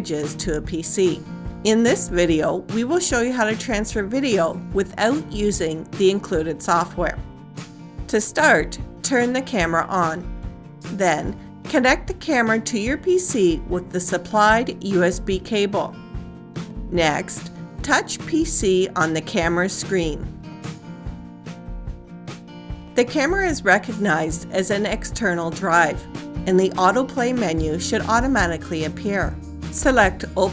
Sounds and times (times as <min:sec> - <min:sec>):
Speech: 0:00.0 - 0:07.2, 0:08.1 - 0:10.2, 0:10.9 - 0:16.0, 0:16.9 - 0:20.3, 0:23.0 - 0:30.5
Music: 0:00.0 - 0:30.5.